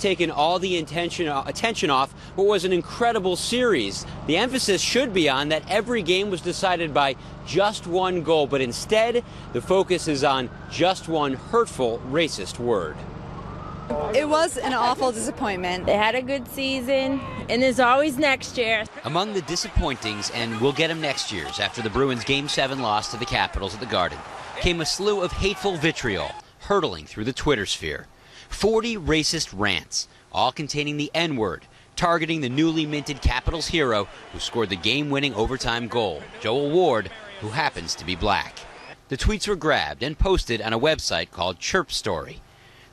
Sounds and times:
Speech: 0:00.0 - 0:13.0, 0:14.2 - 0:42.4.

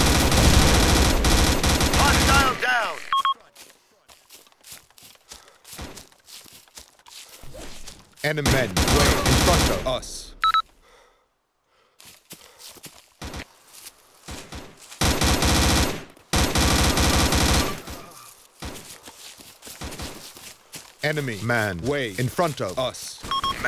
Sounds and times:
Speech: 0:02.0 - 0:04.2, 0:08.2 - 0:10.4, 0:21.0 - 0:23.6.

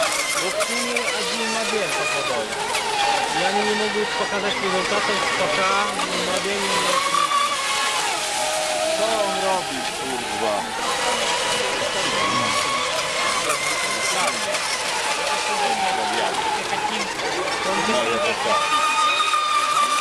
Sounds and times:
Motorboat, speedboat: 0:00.0 - 0:20.0.

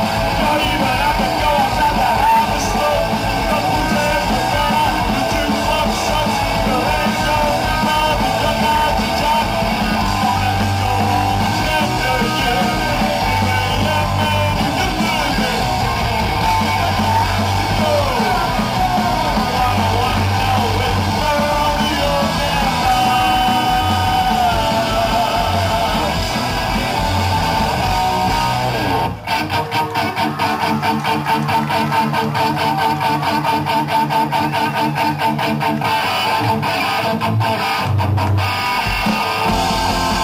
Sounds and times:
Drum: 0:00.0 - 0:29.1, 0:37.6 - 0:40.2
Drum kit: 0:00.0 - 0:40.2
Singing: 0:00.3 - 0:27.6.

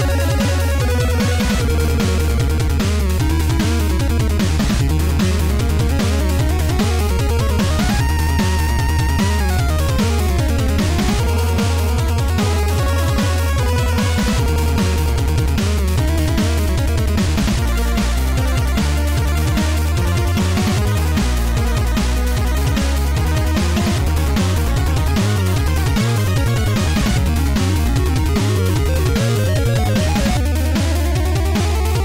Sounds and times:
Background music: 0:00.0 - 0:32.0.

